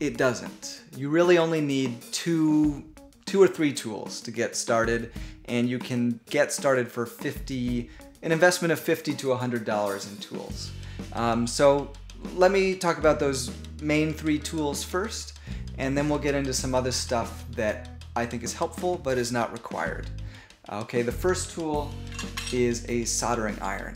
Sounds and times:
Speech: 0.0s - 20.1s, 20.7s - 21.9s, 22.5s - 23.9s
Music: 0.0s - 23.9s.

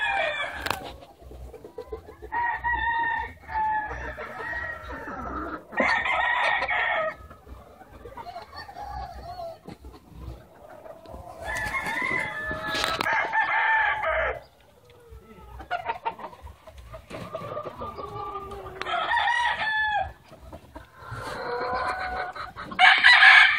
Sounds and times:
Chicken, rooster: 0.0s - 23.5s.

